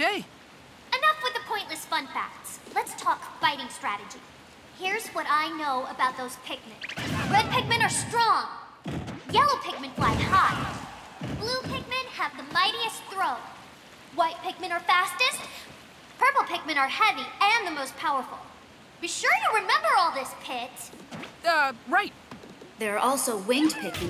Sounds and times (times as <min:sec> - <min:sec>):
Speech: 0:00.0 - 0:00.3, 0:00.9 - 0:04.2, 0:04.8 - 0:08.5, 0:09.3 - 0:10.8, 0:11.4 - 0:13.5, 0:14.1 - 0:15.5, 0:16.2 - 0:20.9, 0:22.8 - 0:24.0.